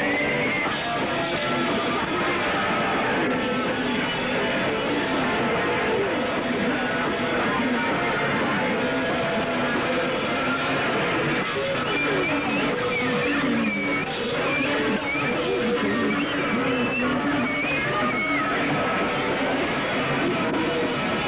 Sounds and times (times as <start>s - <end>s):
Music: 0.0s - 21.2s
Speech: 0.0s - 21.2s.